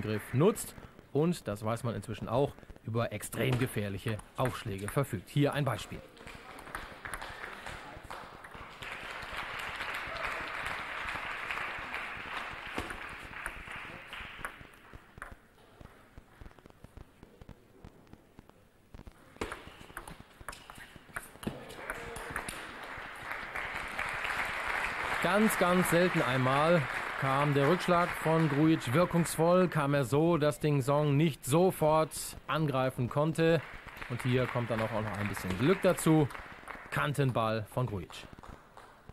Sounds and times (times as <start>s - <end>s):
Speech: 0.0s - 6.7s, 25.2s - 36.3s, 37.0s - 38.3s.